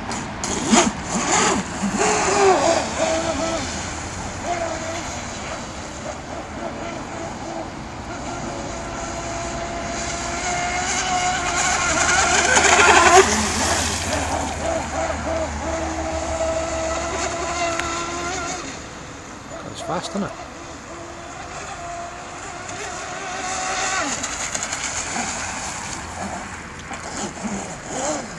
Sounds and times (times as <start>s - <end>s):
Speech: 19.6s - 20.4s.